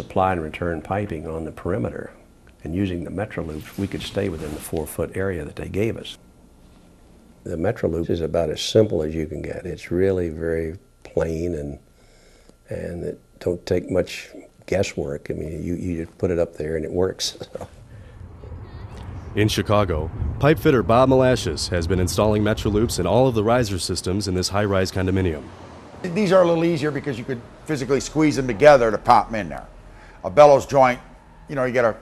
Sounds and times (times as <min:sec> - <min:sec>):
Speech: 0:00.0 - 0:06.2, 0:07.5 - 0:11.8, 0:12.7 - 0:17.7, 0:19.4 - 0:32.0.